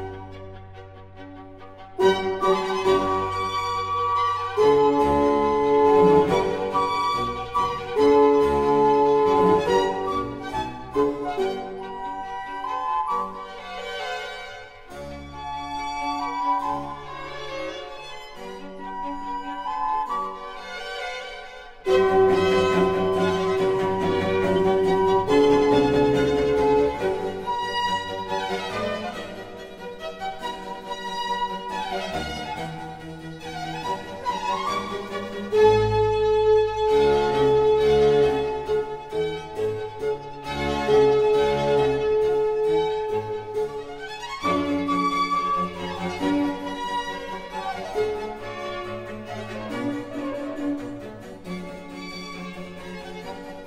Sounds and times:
Cello: 0.0 - 53.6
Violin, fiddle: 0.0 - 53.6.

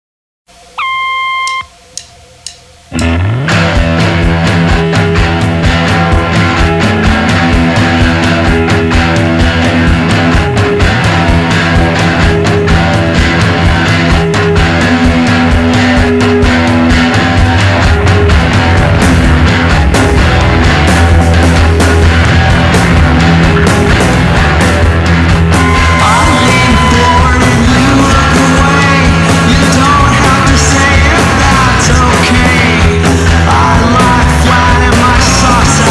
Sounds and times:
Music: 0.5 - 35.9.

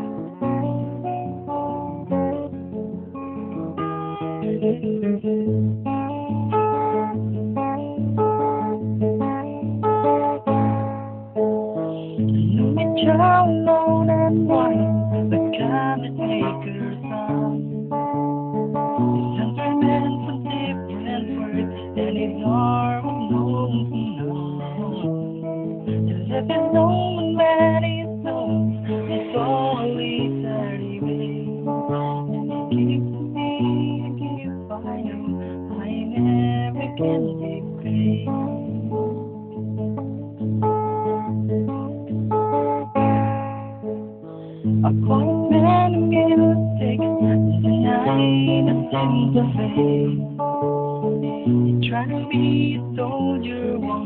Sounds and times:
Acoustic guitar: 0.0 - 54.0
Electric guitar: 0.0 - 54.0
Strum: 0.0 - 54.0.

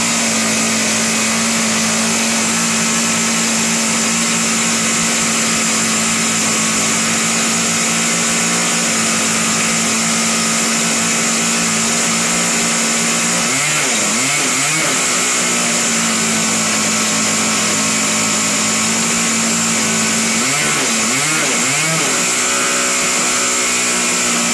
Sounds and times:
Heavy engine (low frequency): 0.0 - 24.5.

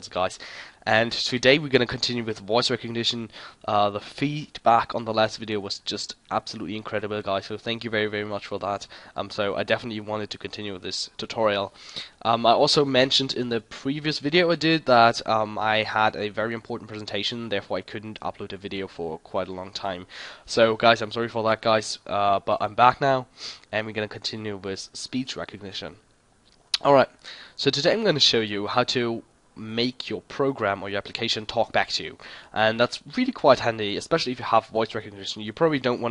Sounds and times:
Speech: 0.0 - 26.0, 26.8 - 36.1.

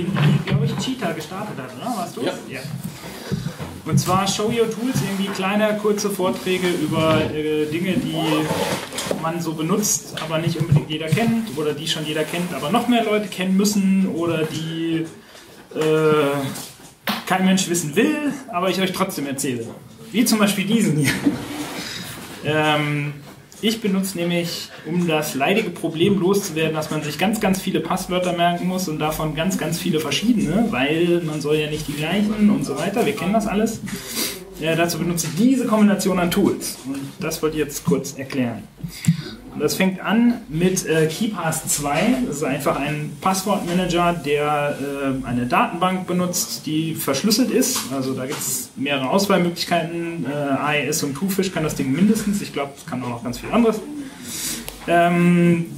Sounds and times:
Speech: 0.0 - 2.9, 3.8 - 21.4, 22.4 - 54.0, 54.8 - 55.7.

